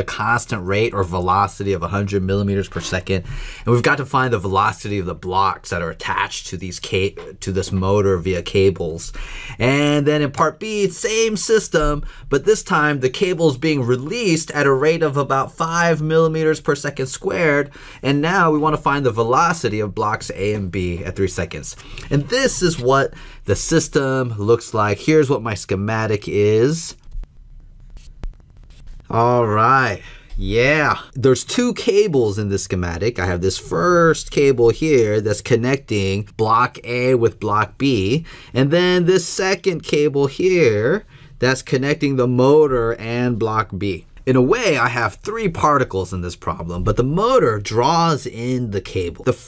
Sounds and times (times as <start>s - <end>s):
Speech: 0.0s - 27.0s, 29.1s - 49.4s.